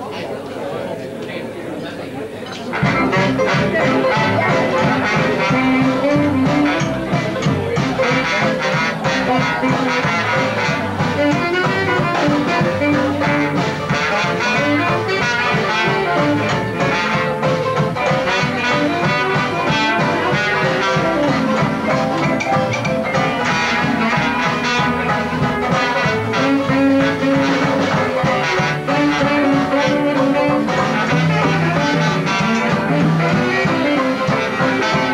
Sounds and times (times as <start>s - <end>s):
Music: 2.6s - 35.1s.